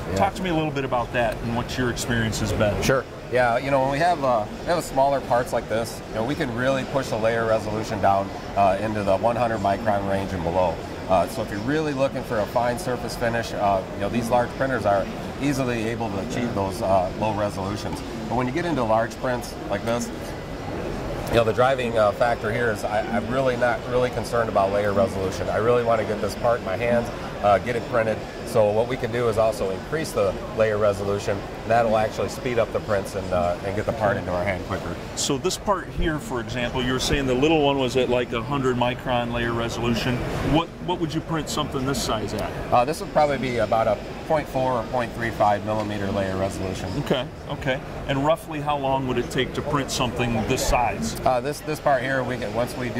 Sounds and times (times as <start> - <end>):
Speech: 0.0 - 20.4, 21.3 - 52.9.